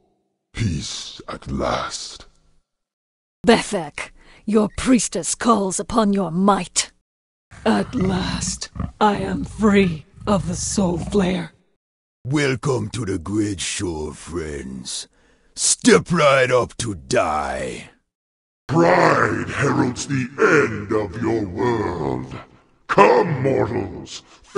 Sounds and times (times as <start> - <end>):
Speech: 0.6 - 2.3, 3.5 - 6.9, 7.6 - 11.6, 12.3 - 18.0, 18.7 - 24.5.